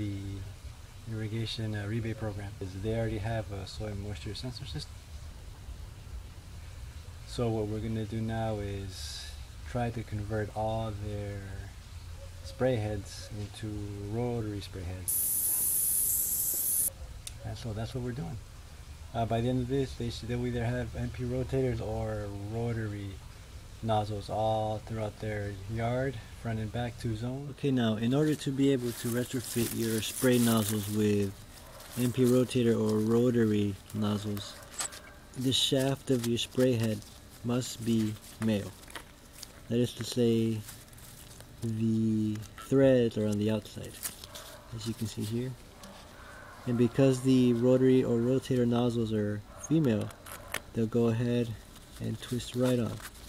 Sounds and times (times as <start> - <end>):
Speech: 0.0 - 0.5, 1.1 - 4.9, 7.3 - 11.8, 12.5 - 15.1, 17.4 - 18.4, 19.1 - 23.2, 23.8 - 31.4, 32.0 - 34.6, 35.4 - 38.8, 39.7 - 40.7, 41.6 - 44.0, 44.7 - 45.6, 46.7 - 50.1, 50.7 - 53.1
Spray: 15.1 - 16.9.